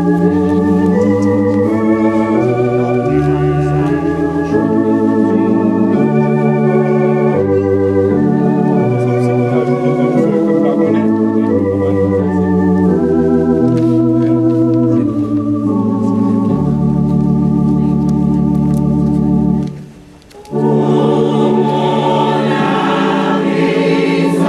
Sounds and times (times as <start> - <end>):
Music: 0.0 - 24.4
Speech: 9.5 - 12.2.